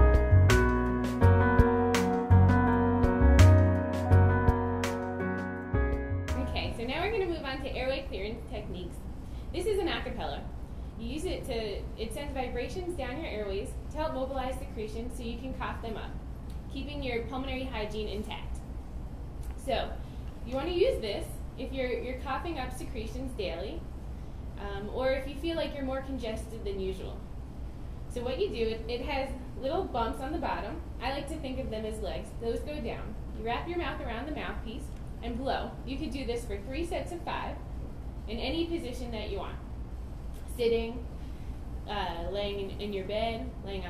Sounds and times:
Speech: 6.3s - 9.0s, 9.6s - 18.6s, 19.6s - 23.8s, 24.6s - 27.2s, 28.1s - 37.6s, 38.3s - 39.7s, 40.5s - 41.0s, 41.9s - 43.9s.

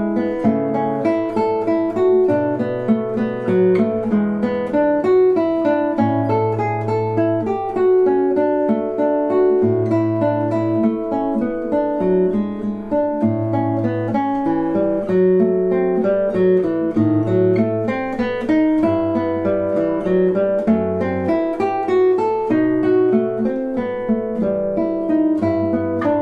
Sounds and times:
Acoustic guitar: 0.0s - 26.2s.

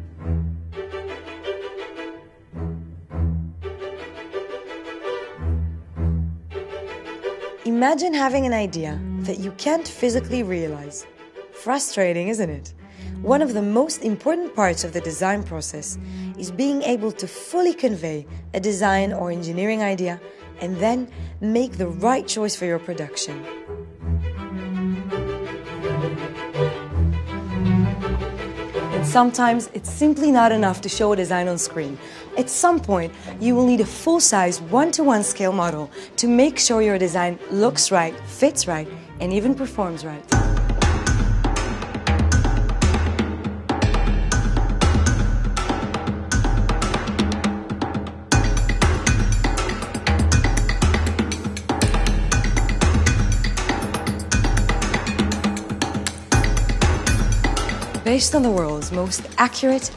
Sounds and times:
Music: 0.0s - 59.9s
Speech: 7.7s - 11.0s, 11.6s - 23.4s, 29.0s - 40.3s, 58.1s - 59.9s.

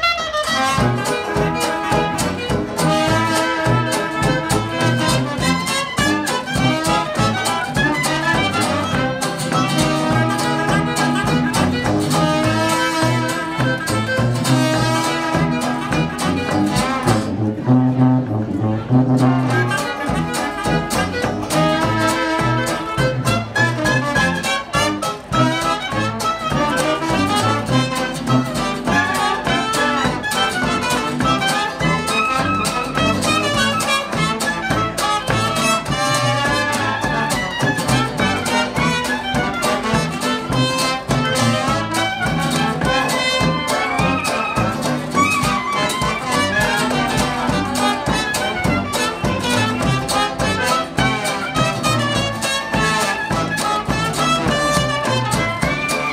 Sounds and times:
Music: 0.0s - 56.1s.

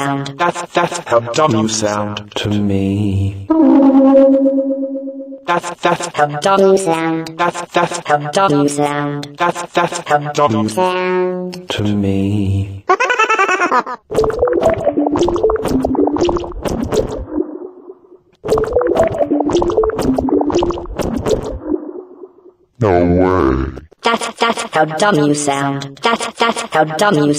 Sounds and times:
Speech: 0.0s - 3.4s, 5.5s - 12.7s, 22.8s - 27.3s.

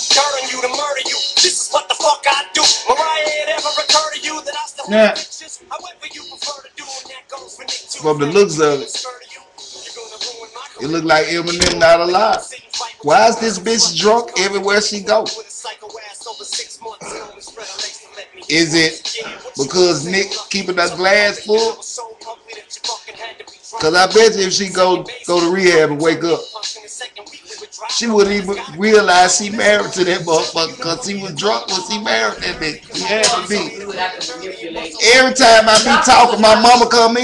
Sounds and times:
Male speech, man speaking: 4.8s - 5.2s, 7.9s - 8.9s, 10.8s - 15.4s, 18.5s - 21.8s, 23.8s - 26.4s, 27.9s - 37.2s
Narration, monologue: 8.0s - 9.0s, 10.8s - 15.4s, 18.5s - 21.8s, 23.8s - 26.4s, 28.0s - 34.4s, 35.0s - 37.2s.

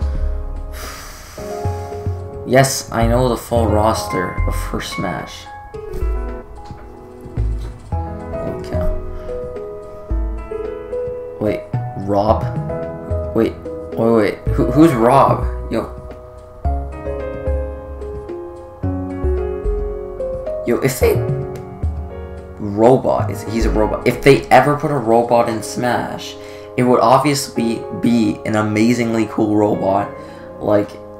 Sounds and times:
Music: 0.0s - 31.1s
Speech: 2.5s - 5.5s, 11.4s - 12.5s, 13.4s - 16.0s, 20.6s - 21.3s, 22.6s - 31.0s.

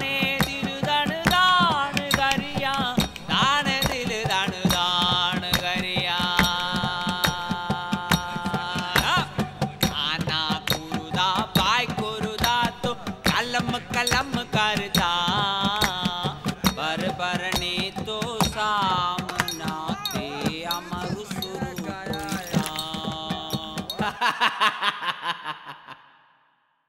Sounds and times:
Music: 0.0s - 24.3s
Speech: 19.3s - 23.8s.

